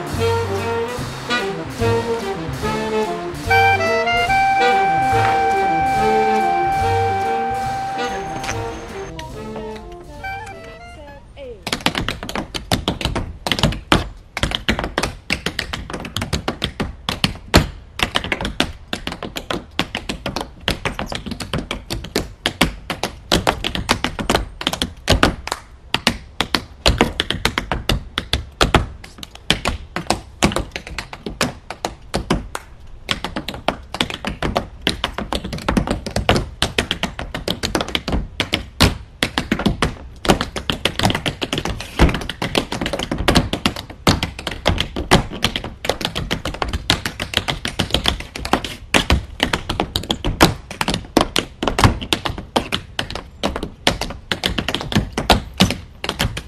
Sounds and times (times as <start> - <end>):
Outside, urban or manmade: 0.0 - 56.4.